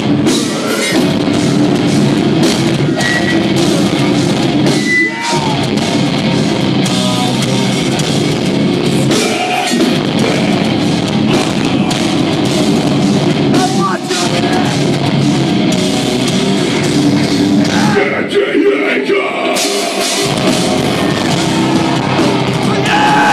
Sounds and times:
Music: 0.0s - 23.3s
Speech: 13.5s - 14.8s.

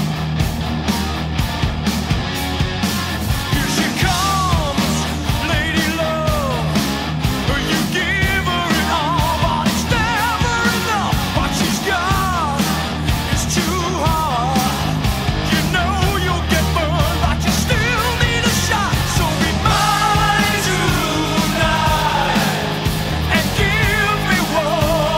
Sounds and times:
Exciting music: 0.0s - 25.1s.

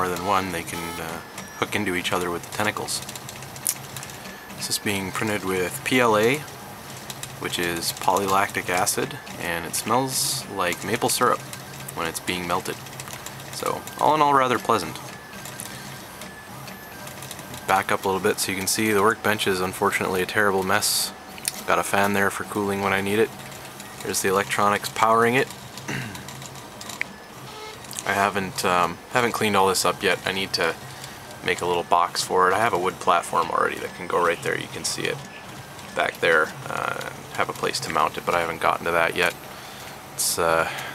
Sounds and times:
Speech: 0.0s - 3.1s, 4.6s - 6.5s, 7.4s - 11.4s, 12.0s - 12.8s, 13.6s - 15.1s, 17.6s - 23.3s, 24.0s - 25.5s, 28.0s - 30.8s, 31.4s - 39.4s, 40.2s - 40.8s
Printer: 0.0s - 40.9s.

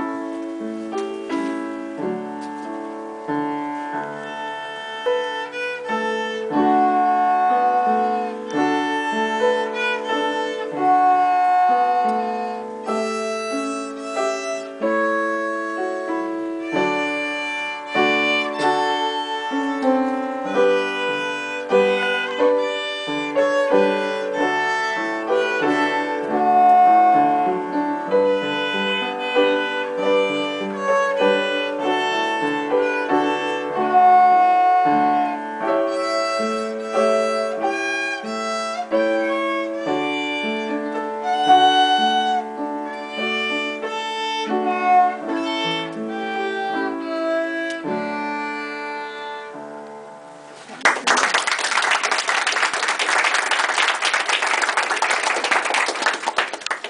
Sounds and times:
Violin, fiddle: 0.0s - 50.8s.

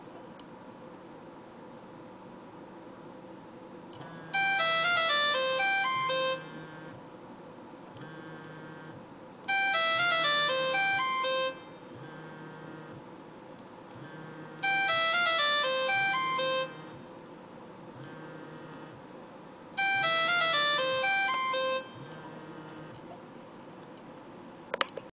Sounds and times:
Music: 4.2s - 7.0s, 9.5s - 12.9s, 14.1s - 17.0s, 19.8s - 22.9s
Ringtone: 4.3s - 6.9s, 9.5s - 12.5s, 14.1s - 17.0s, 19.8s - 22.8s.

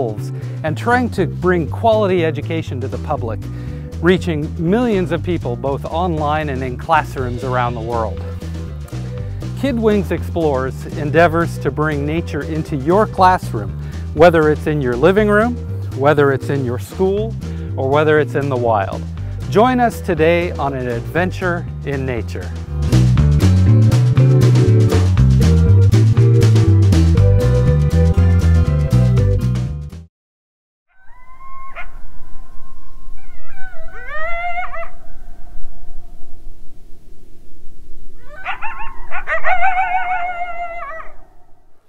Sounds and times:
Speech: 0.0s - 3.4s, 4.0s - 8.2s, 9.6s - 22.5s
Music: 0.0s - 30.1s.

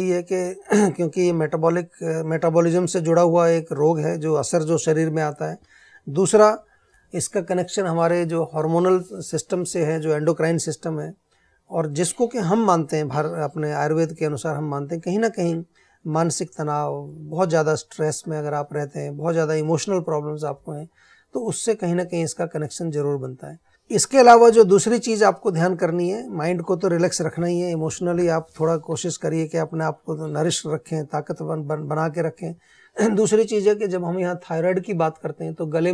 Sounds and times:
Speech: 0.0s - 35.9s.

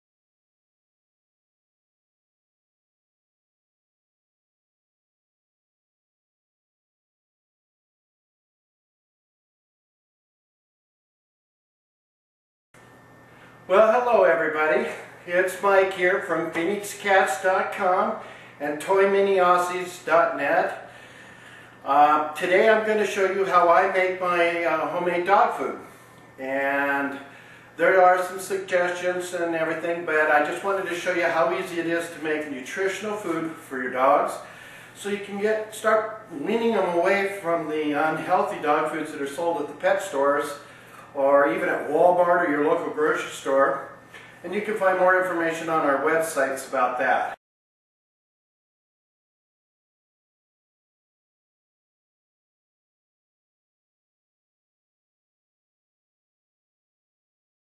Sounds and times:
Speech: 13.7s - 20.9s, 21.8s - 47.4s.

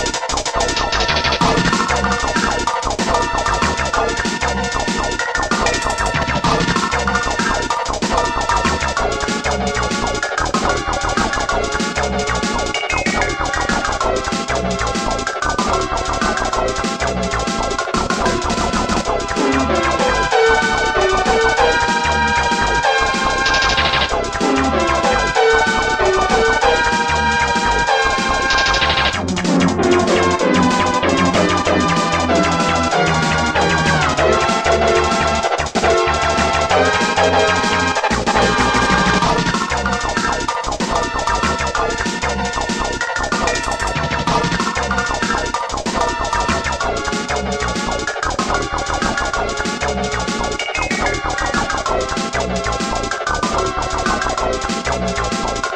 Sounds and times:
Music: 0.0s - 55.7s.

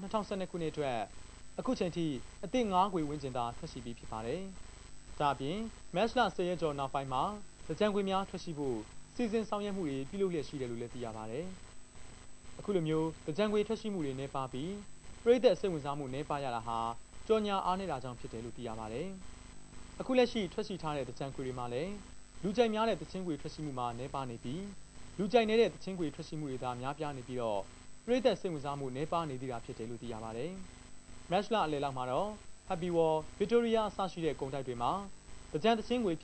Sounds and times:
Speech: 0.0s - 4.6s, 5.2s - 11.6s, 12.6s - 19.2s, 20.0s - 30.7s, 31.3s - 36.2s.

